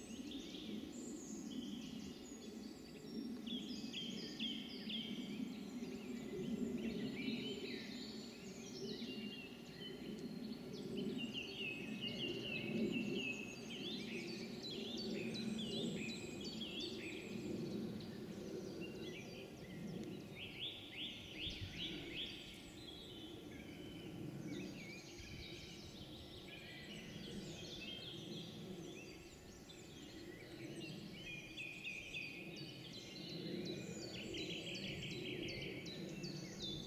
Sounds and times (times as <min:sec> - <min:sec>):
Environmental noise: 0:00.0 - 0:36.8.